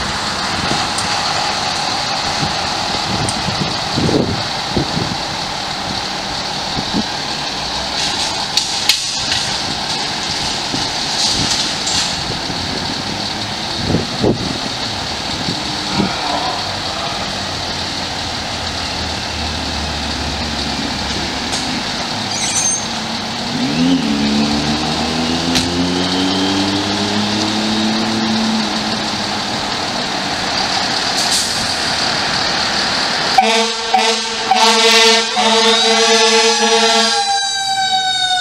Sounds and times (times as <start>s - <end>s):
Medium engine (mid frequency): 0.0s - 37.2s
Heavy engine (low frequency): 0.0s - 38.4s
Vehicle: 0.0s - 38.4s.